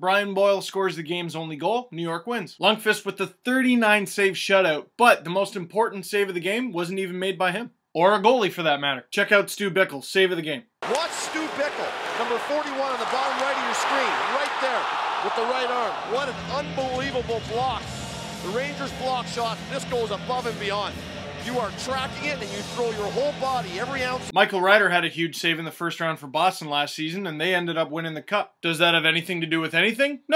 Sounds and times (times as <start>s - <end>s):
Speech: 0.0s - 17.8s, 18.4s - 30.3s
Music: 15.9s - 24.3s.